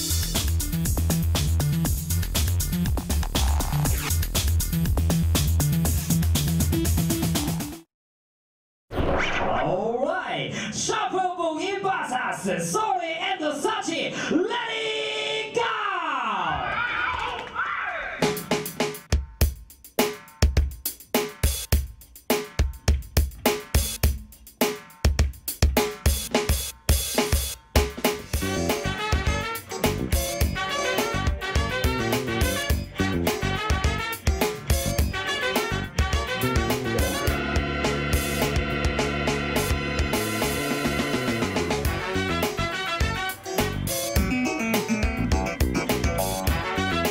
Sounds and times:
Music: 0.0 - 7.9, 18.0 - 47.1.

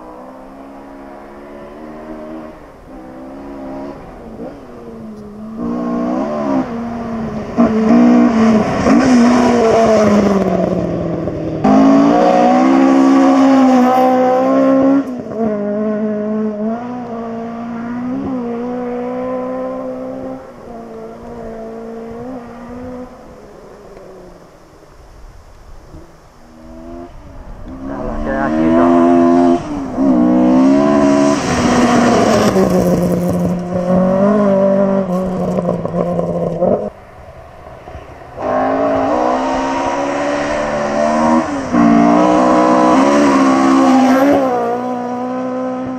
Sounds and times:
Race car, auto racing: 0.0 - 45.9.

